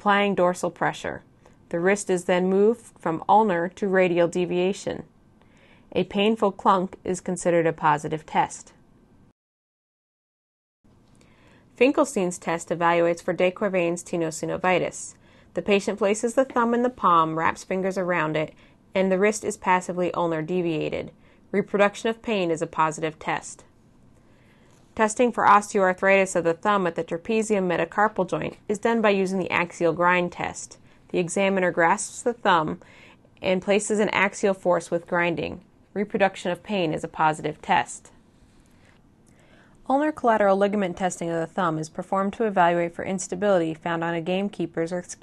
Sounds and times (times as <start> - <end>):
Speech: 0.0 - 5.1, 5.9 - 8.8, 11.8 - 23.7, 25.0 - 32.8, 33.4 - 38.2, 39.9 - 45.2.